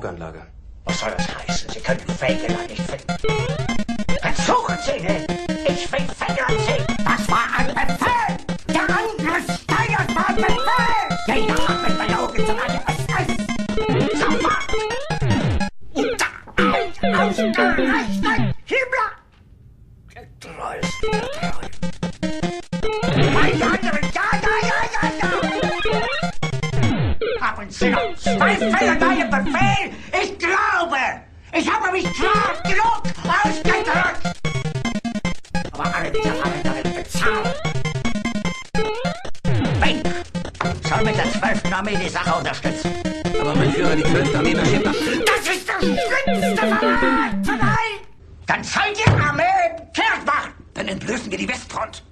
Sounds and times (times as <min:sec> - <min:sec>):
Speech: 0:00.0 - 0:03.0, 0:04.2 - 0:13.4, 0:23.3 - 0:25.8, 0:27.4 - 0:34.2, 0:35.8 - 0:37.6, 0:40.8 - 0:52.1.